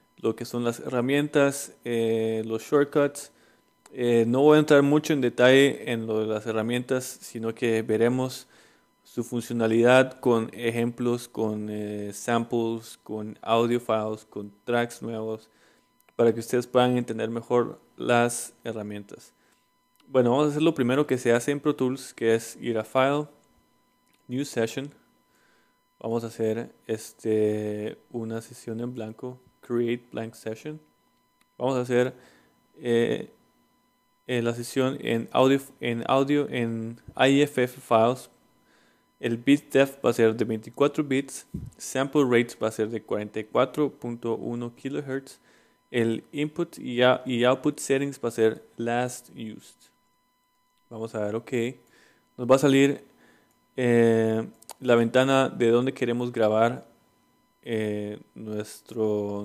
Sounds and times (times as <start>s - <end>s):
Speech: 0.2s - 8.5s, 9.1s - 15.5s, 16.2s - 19.4s, 20.0s - 23.4s, 24.3s - 25.0s, 26.0s - 30.9s, 31.6s - 32.2s, 32.8s - 33.4s, 34.3s - 38.4s, 39.2s - 49.9s, 50.9s - 51.8s, 52.4s - 53.1s, 53.8s - 56.9s, 57.6s - 59.4s.